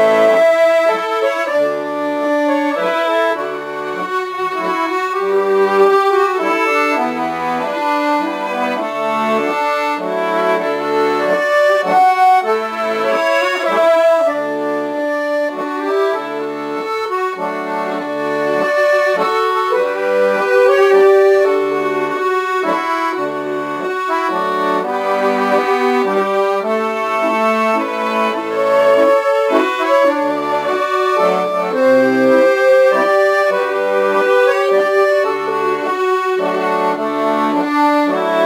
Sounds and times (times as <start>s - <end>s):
Violin, fiddle: 0.0s - 38.4s.